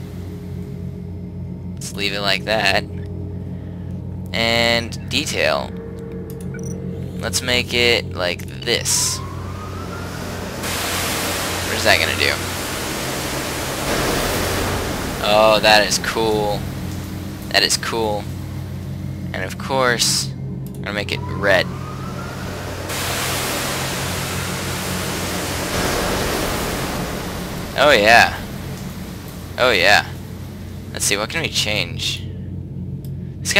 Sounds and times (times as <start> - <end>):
Speech: 1.8 - 2.8, 4.4 - 5.7, 7.2 - 9.2, 11.7 - 12.4, 15.2 - 16.6, 17.5 - 18.3, 19.4 - 21.7, 27.8 - 28.4, 29.6 - 30.1, 31.0 - 32.3
Pink noise: 8.4 - 32.2.